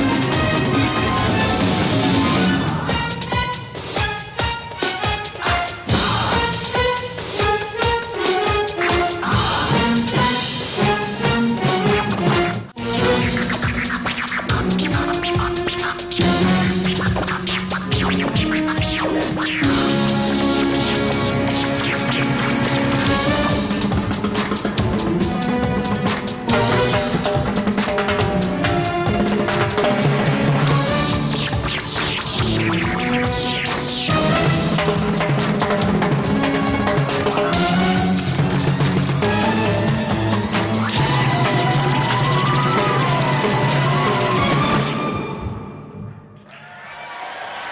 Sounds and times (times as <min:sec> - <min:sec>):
Orchestra: 0:00.0 - 0:47.7.